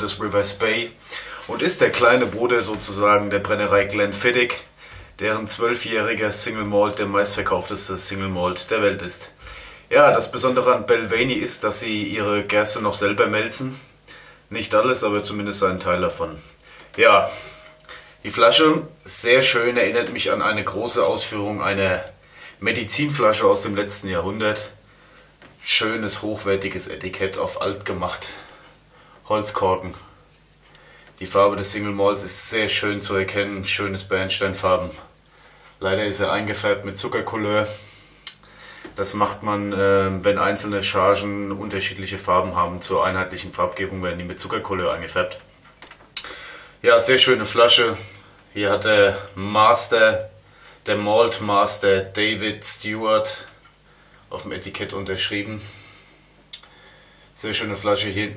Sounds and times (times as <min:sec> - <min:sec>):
Speech: 0:00.0 - 0:13.9, 0:14.5 - 0:17.6, 0:18.2 - 0:24.8, 0:25.6 - 0:28.5, 0:29.2 - 0:30.2, 0:31.2 - 0:35.2, 0:35.8 - 0:37.8, 0:39.0 - 0:45.5, 0:46.8 - 0:53.6, 0:54.3 - 0:55.7, 0:57.4 - 0:58.3.